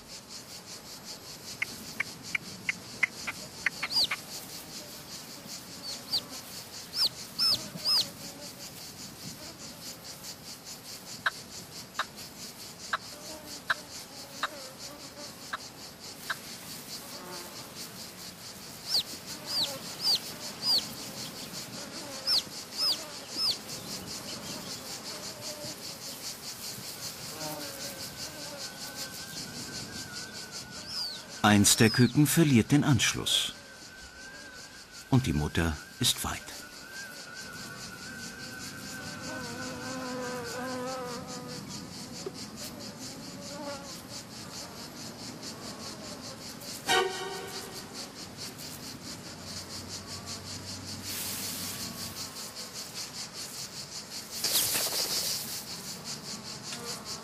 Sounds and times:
Bee, wasp, etc.: 0.0 - 57.2
Fly, housefly: 0.0 - 57.2.

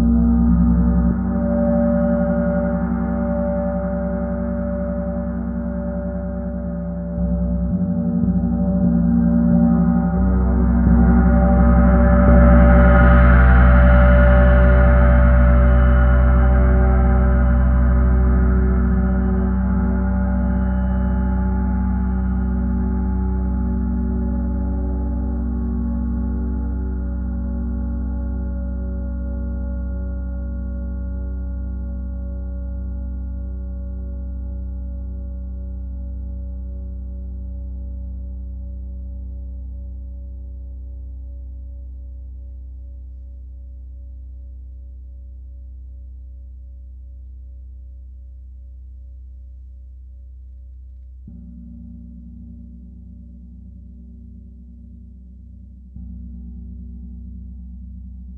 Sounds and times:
Gong: 0.0 - 42.0, 51.2 - 58.3.

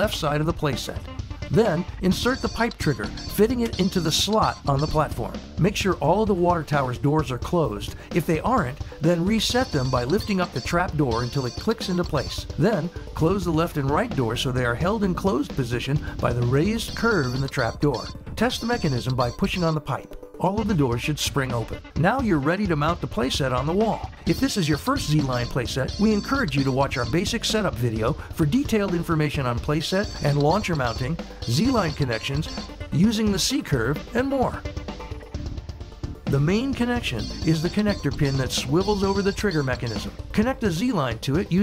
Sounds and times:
Speech: 0.0 - 34.6, 36.3 - 41.6
Music: 0.0 - 41.6.

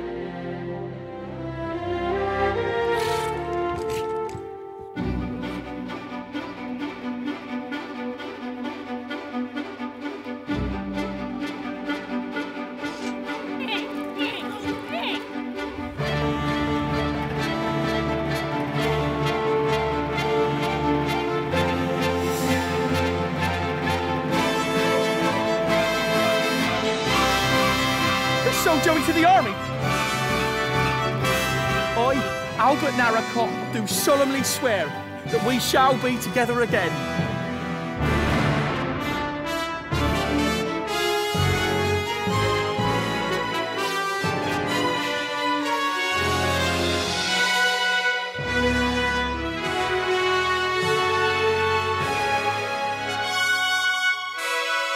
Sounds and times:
Music: 0.0 - 54.9
Speech: 13.6 - 15.3, 28.4 - 29.6, 32.0 - 37.0.

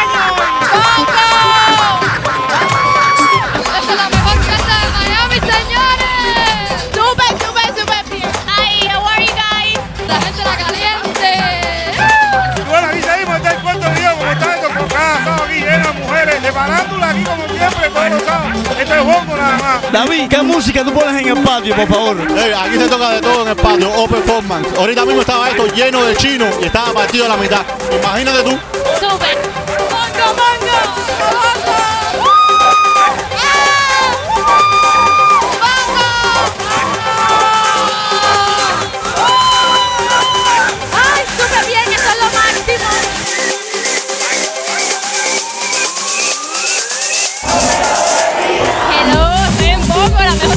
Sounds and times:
Music: 0.0 - 50.5.

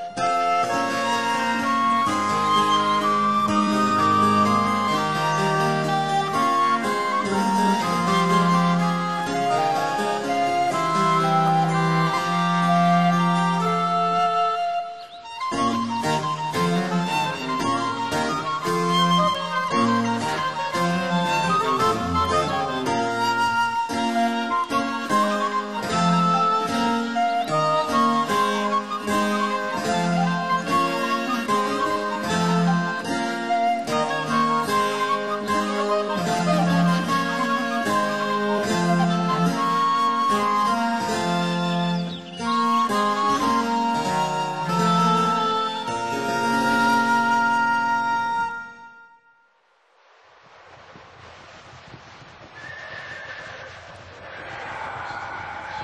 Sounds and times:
Music: 0.0 - 49.8.

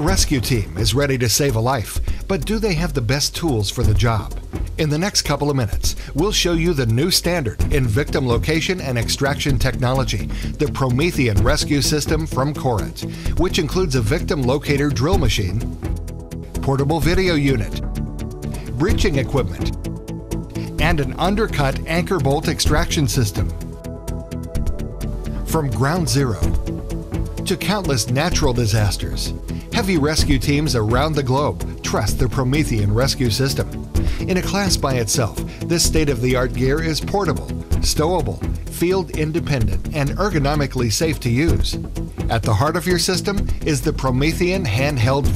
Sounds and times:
Speech: 0.0 - 15.6, 16.6 - 17.8, 18.7 - 19.7, 20.7 - 23.5, 25.5 - 26.6, 27.5 - 45.3
Music: 0.0 - 45.3.

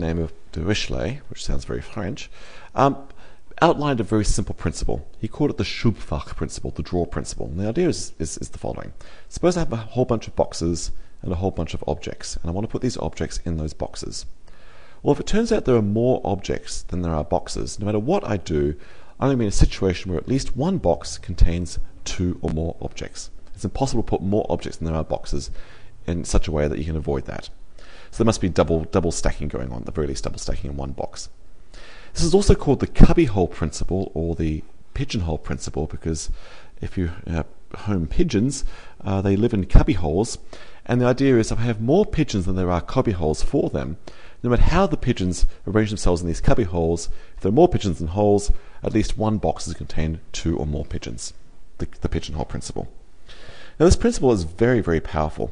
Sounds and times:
Speech: 0.0 - 14.3, 15.0 - 31.4, 32.2 - 53.0, 53.8 - 55.5.

